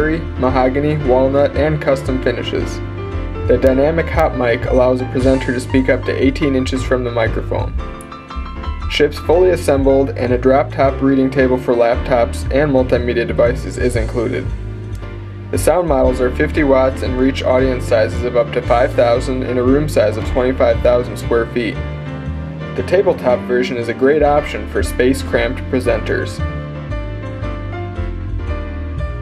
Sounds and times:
Speech: 0:00.0 - 0:02.8, 0:03.5 - 0:07.8, 0:08.9 - 0:14.5, 0:15.6 - 0:21.8, 0:22.8 - 0:26.5
Music: 0:00.0 - 0:29.2.

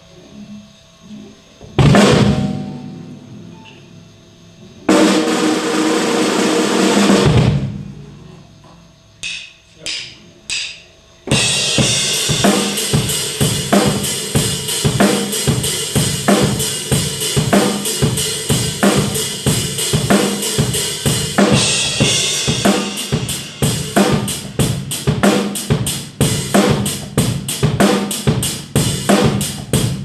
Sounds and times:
Hi-hat: 0:09.2 - 0:30.0.

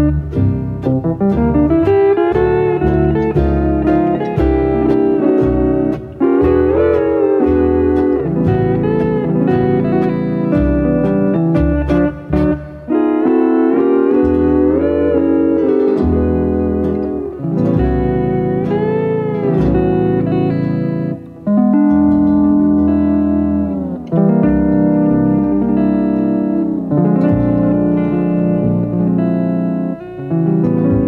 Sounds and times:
Steel guitar, slide guitar: 0:00.0 - 0:31.0.

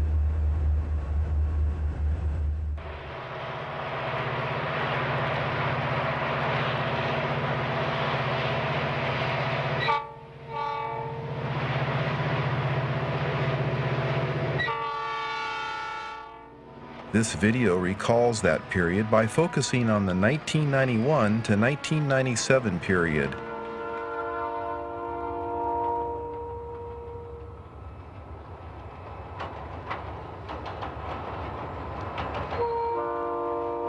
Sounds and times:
Train horn: 0:09.7 - 0:11.4, 0:14.0 - 0:16.6, 0:17.7 - 0:27.6, 0:32.6 - 0:33.8.

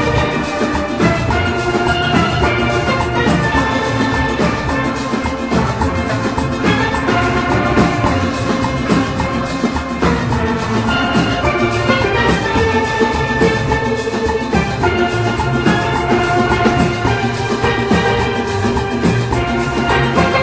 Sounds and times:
Steelpan: 0:00.0 - 0:20.4.

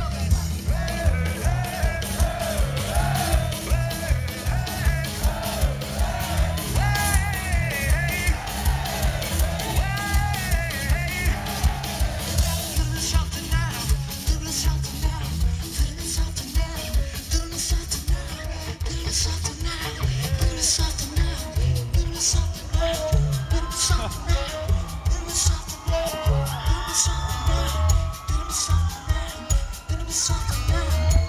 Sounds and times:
Music: 0:00.0 - 0:31.2
Whoop: 0:01.0 - 0:12.8, 0:22.9 - 0:31.2.

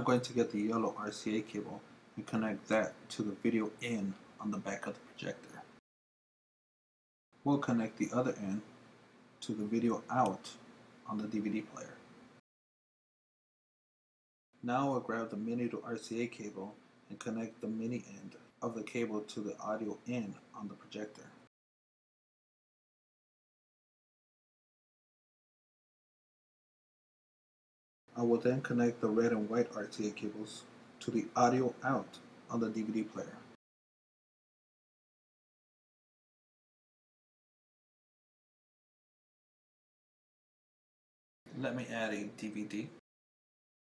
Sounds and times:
Speech: 0:00.0 - 0:05.7, 0:07.5 - 0:08.7, 0:09.4 - 0:12.0, 0:14.6 - 0:21.4, 0:28.2 - 0:33.6, 0:41.5 - 0:43.0
Inside, small room: 0:00.0 - 0:05.8, 0:07.4 - 0:12.4, 0:14.6 - 0:21.5, 0:28.1 - 0:33.6, 0:41.5 - 0:43.0.

